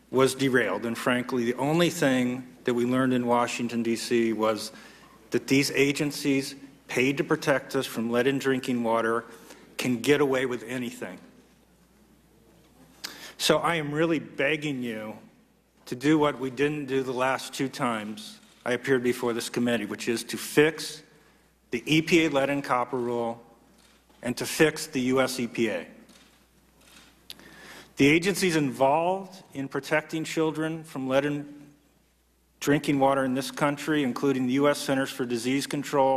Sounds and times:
Speech: 0.1 - 11.3, 13.4 - 21.1, 21.7 - 23.5, 24.2 - 26.0, 28.0 - 31.8, 32.6 - 36.1.

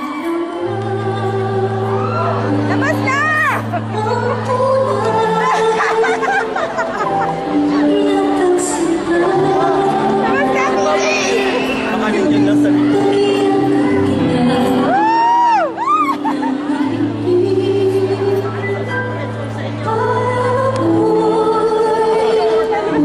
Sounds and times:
Female singing: 0.0 - 6.6, 7.6 - 23.0
Music: 0.0 - 23.0.

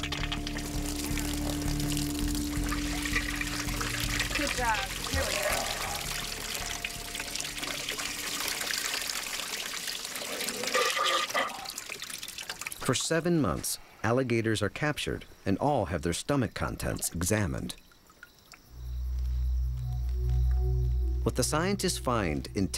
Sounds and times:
Water tap, faucet: 0.0 - 13.0
Trickle, dribble: 0.0 - 13.2, 16.6 - 18.7
Water: 0.0 - 13.6, 16.5 - 18.8.

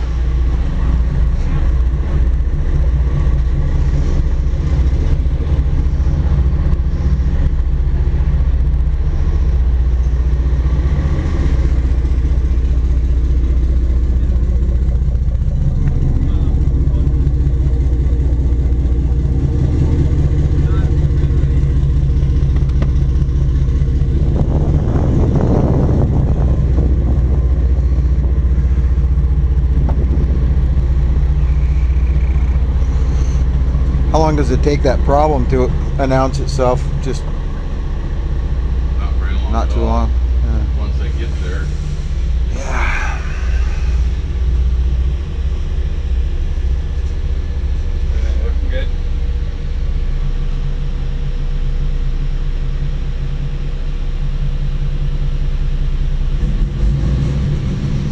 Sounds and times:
Boat, Water vehicle: 0.0 - 53.4.

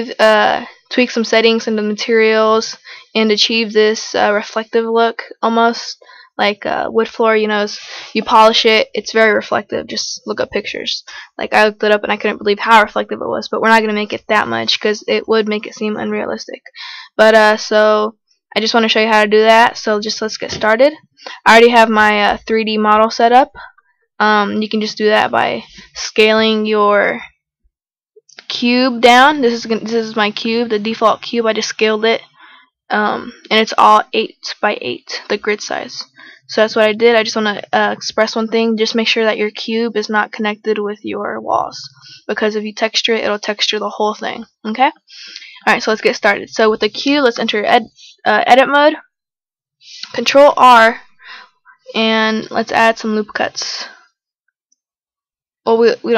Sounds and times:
Speech: 0.0 - 27.3, 28.4 - 32.3, 32.9 - 49.0, 49.9 - 51.0, 51.8 - 54.0, 55.7 - 56.1.

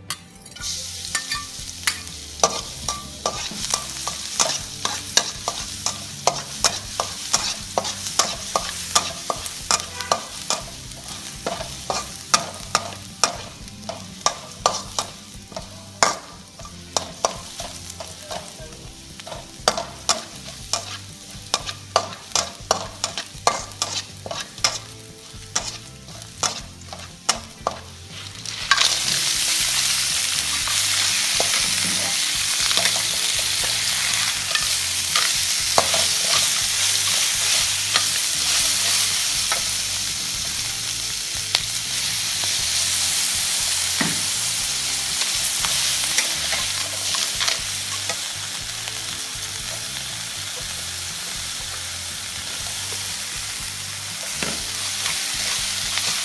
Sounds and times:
Frying (food): 0.0 - 56.2
Sizzle: 0.0 - 56.2
Stir: 19.7 - 24.9.

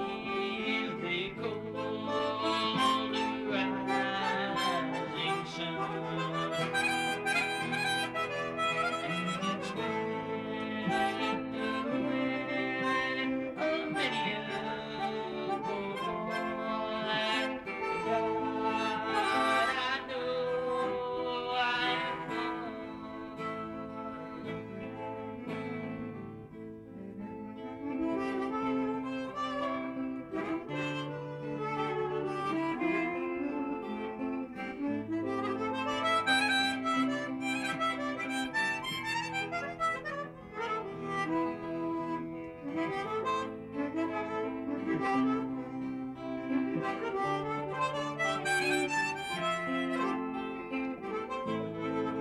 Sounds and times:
Harmonica: 0.0 - 52.2.

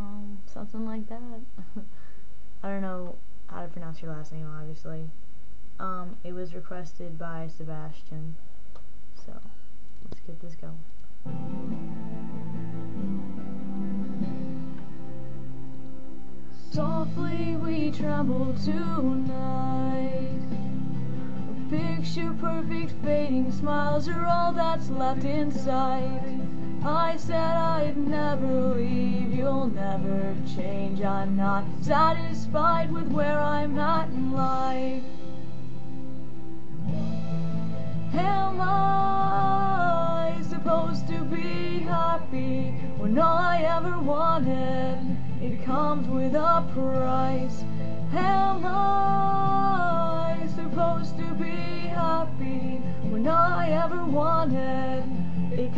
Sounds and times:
Music: 8.6 - 55.7.

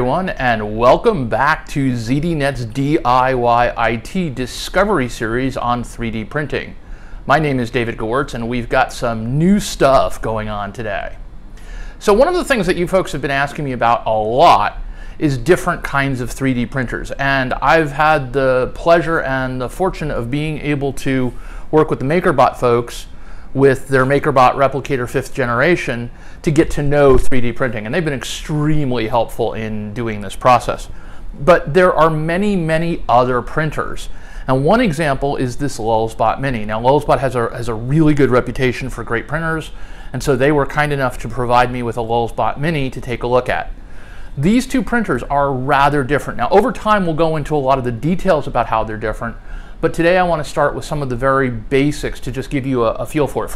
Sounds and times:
Speech: 0.0 - 11.2, 12.0 - 43.8, 44.4 - 53.5.

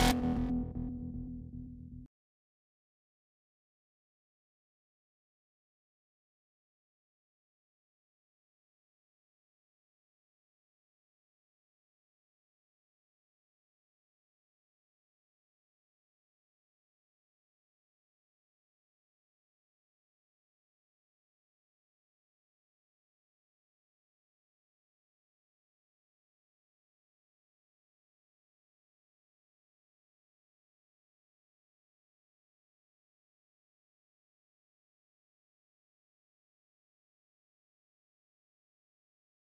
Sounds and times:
Music: 0.0 - 2.1.

